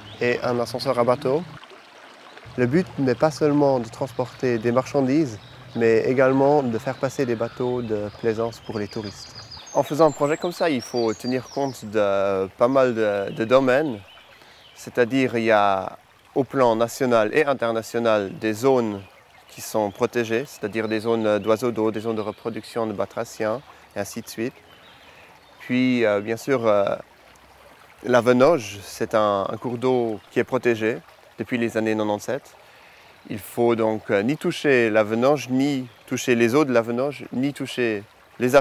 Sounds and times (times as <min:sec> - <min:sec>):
Speech: 0:00.2 - 0:01.6, 0:02.6 - 0:14.0, 0:14.8 - 0:24.6, 0:25.6 - 0:27.0, 0:28.0 - 0:32.5, 0:33.3 - 0:38.6.